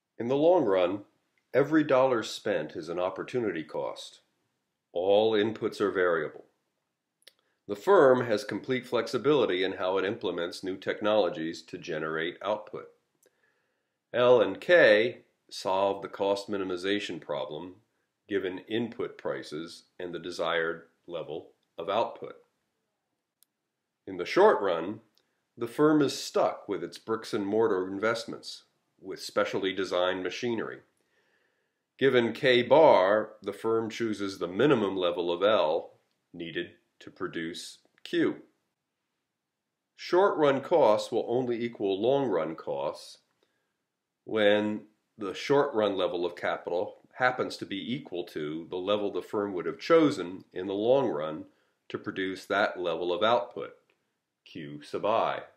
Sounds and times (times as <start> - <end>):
Speech: 0.2 - 4.3, 5.0 - 6.5, 7.7 - 13.0, 14.2 - 22.4, 24.1 - 30.9, 32.0 - 38.5, 40.0 - 43.3, 44.3 - 53.8, 54.5 - 55.5.